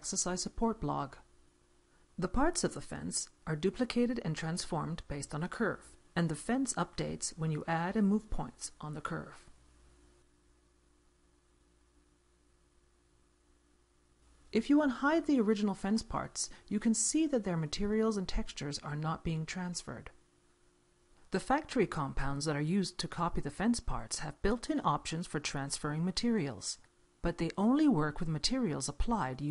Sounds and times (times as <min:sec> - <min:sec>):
Narration, monologue: 0:00.0 - 0:29.5.